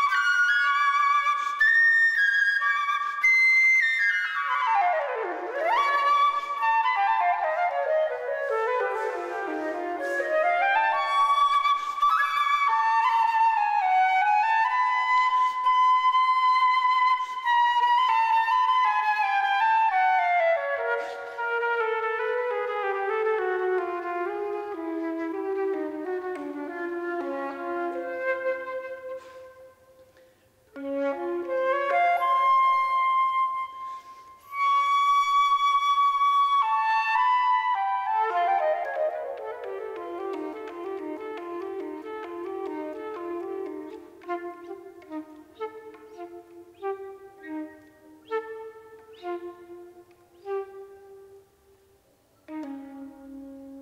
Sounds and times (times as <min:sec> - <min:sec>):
Flute: 0:00.0 - 0:53.8.